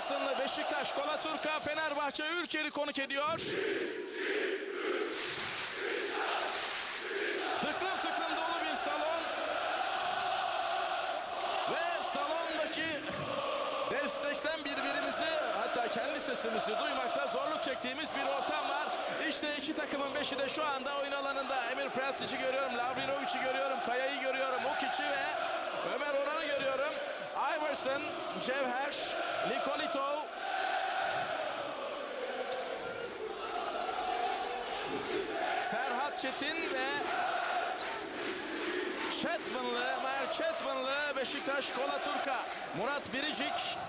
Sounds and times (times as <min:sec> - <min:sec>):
Speech: 0:00.0 - 0:03.4, 0:07.6 - 0:09.4, 0:11.7 - 0:13.1, 0:13.9 - 0:30.3, 0:35.5 - 0:37.1, 0:39.1 - 0:43.8.